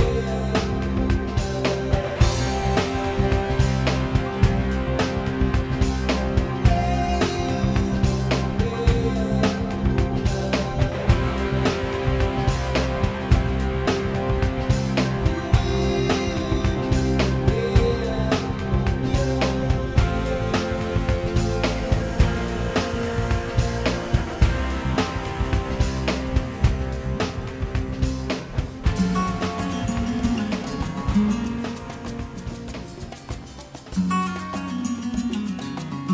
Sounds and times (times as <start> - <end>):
Music: 0.0 - 36.1.